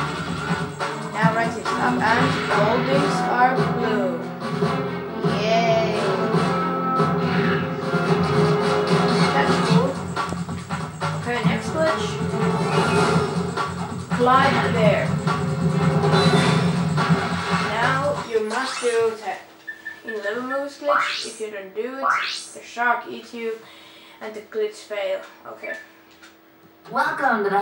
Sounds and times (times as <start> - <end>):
Music: 0.0 - 20.0, 20.7 - 21.4
Speech: 1.1 - 4.3, 5.2 - 6.4, 9.3 - 10.0, 11.3 - 12.2, 14.1 - 15.1, 17.6 - 19.4, 20.0 - 23.6, 24.2 - 25.8, 26.9 - 27.6.